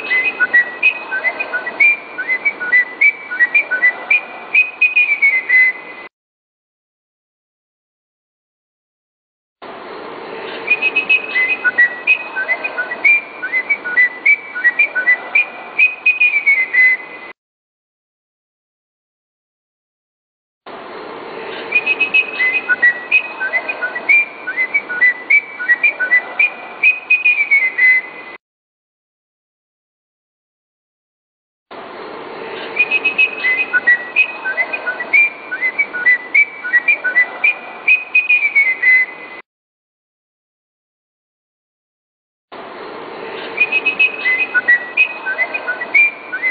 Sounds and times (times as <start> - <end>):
Whistling: 0.0 - 5.9, 10.7 - 17.2, 21.7 - 28.2, 32.8 - 39.4, 43.6 - 46.5.